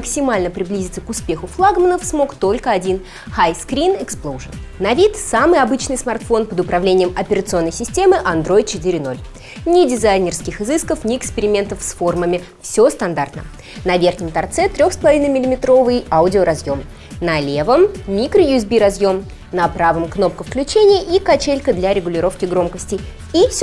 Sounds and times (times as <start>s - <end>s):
Music: 0.0s - 23.6s
Speech: 0.0s - 23.6s.